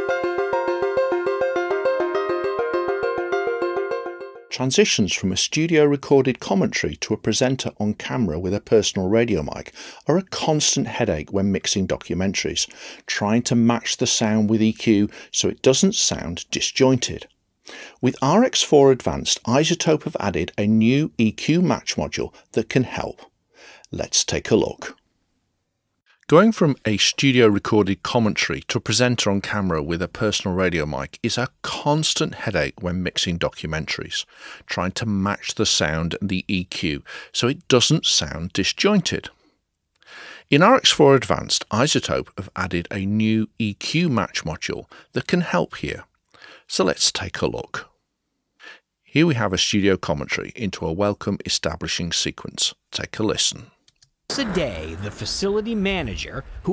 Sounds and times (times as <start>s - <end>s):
Speech: 4.5s - 17.3s, 17.9s - 23.3s, 23.9s - 25.0s, 26.3s - 39.4s, 40.5s - 46.1s, 46.7s - 47.9s, 49.1s - 56.7s.